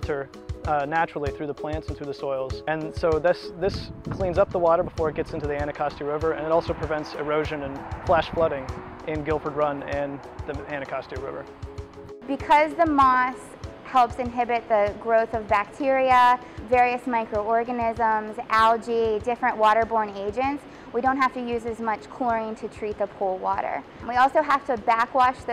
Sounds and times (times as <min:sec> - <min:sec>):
Speech: 0:00.0 - 0:11.4, 0:12.3 - 0:25.5
Music: 0:00.0 - 0:25.5.